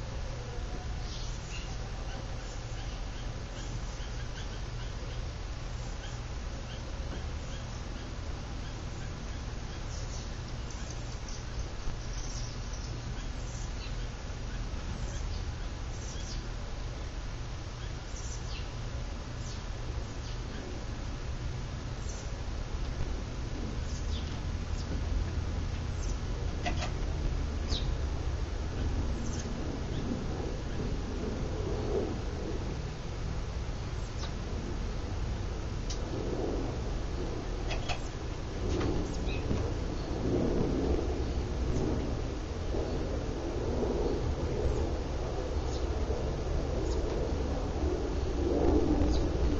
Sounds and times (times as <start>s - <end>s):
Mechanical fan: 0.0s - 49.5s.